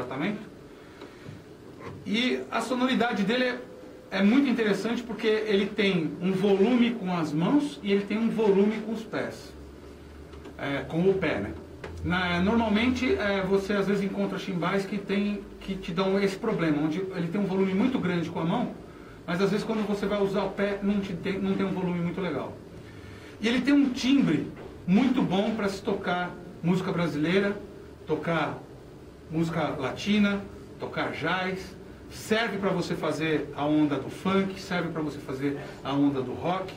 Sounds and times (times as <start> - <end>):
Speech: 0.0 - 0.5, 1.8 - 9.6, 10.6 - 22.6, 23.4 - 28.7, 29.3 - 36.7.